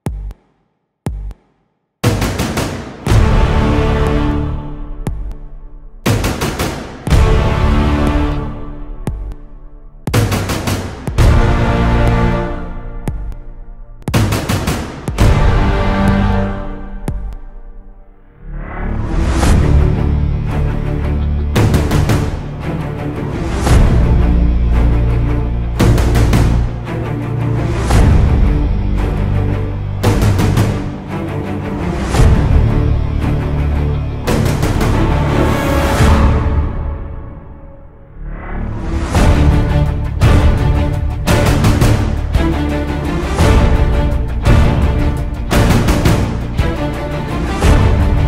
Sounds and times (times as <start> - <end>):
Theme music: 2.0 - 48.2.